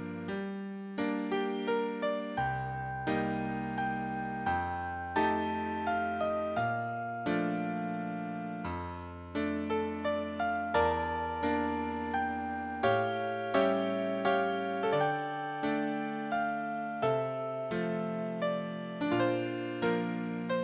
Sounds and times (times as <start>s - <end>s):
Music: 0.0s - 20.6s.